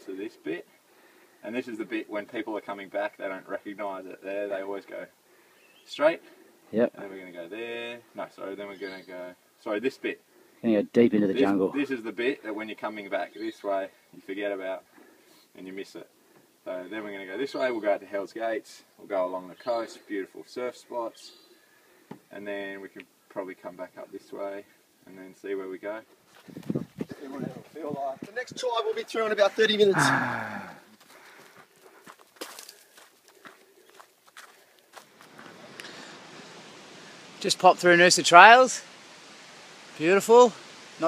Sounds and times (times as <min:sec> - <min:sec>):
Speech: 0:16.7 - 0:21.4, 0:22.3 - 0:26.1, 0:27.2 - 0:30.4, 0:37.4 - 0:38.8, 0:40.0 - 0:41.0.